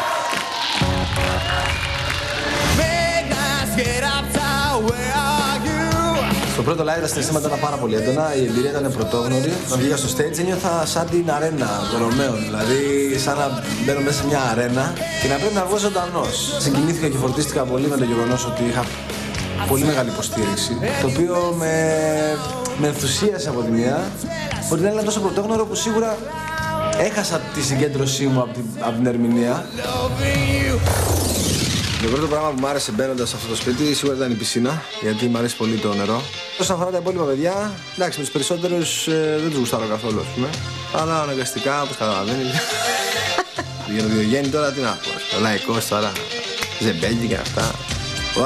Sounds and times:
Music: 0:00.0 - 0:48.4
Speech: 0:06.6 - 0:18.9, 0:19.6 - 0:26.2, 0:32.0 - 0:42.6, 0:46.8 - 0:47.8.

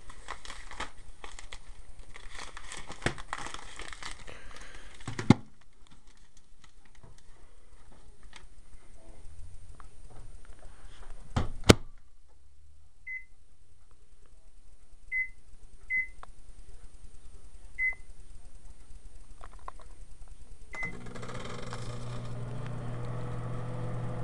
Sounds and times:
Beep, bleep: 0:13.1 - 0:13.3, 0:15.1 - 0:16.2, 0:17.8 - 0:18.1.

